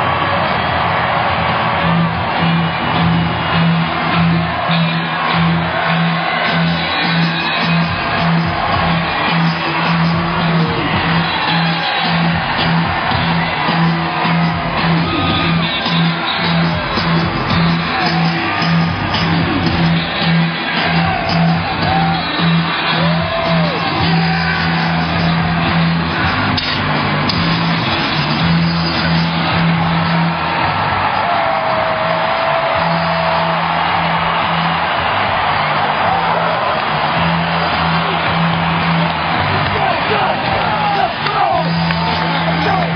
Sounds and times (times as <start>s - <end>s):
Music: 0.0s - 42.9s.